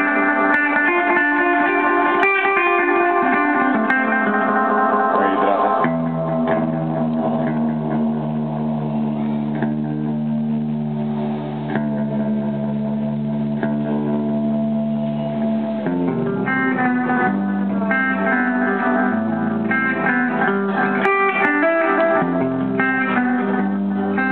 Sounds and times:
Echo: 0.0s - 24.3s
Music: 0.0s - 24.3s
Speech: 5.2s - 5.9s.

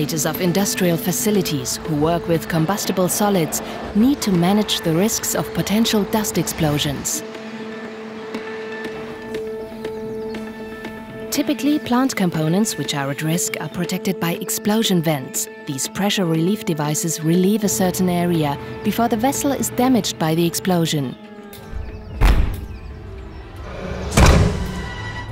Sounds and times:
Speech: 0.0s - 7.2s, 11.3s - 21.2s
Music: 0.0s - 25.3s.

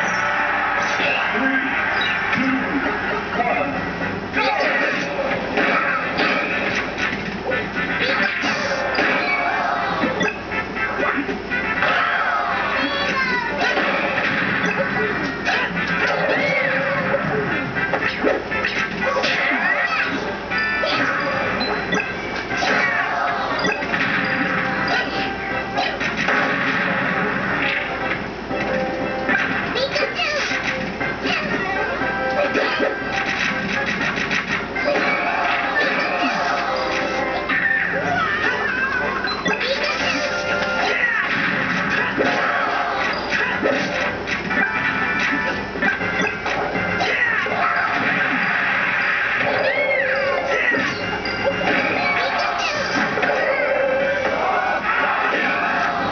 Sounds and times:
Music: 0.0s - 56.1s.

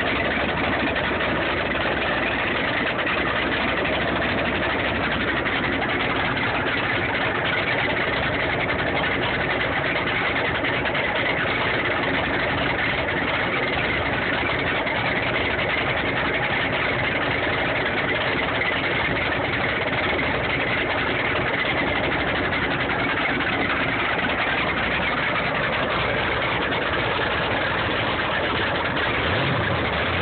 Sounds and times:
Vehicle: 0.0s - 30.2s.

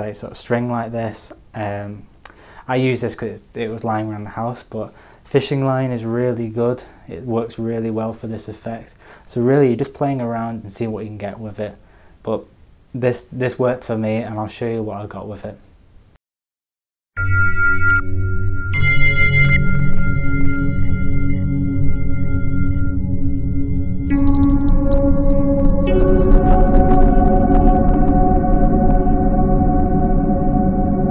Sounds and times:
Music: 17.2s - 31.1s.

